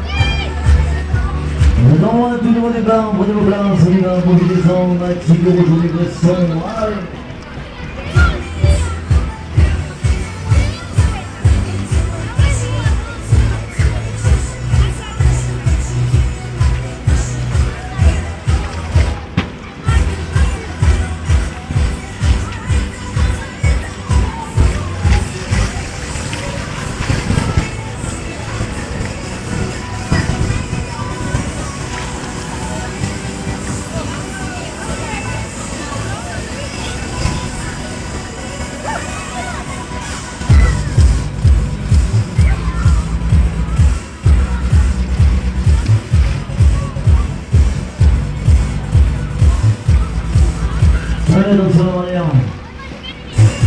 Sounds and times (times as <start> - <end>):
Music: 0.0 - 53.6.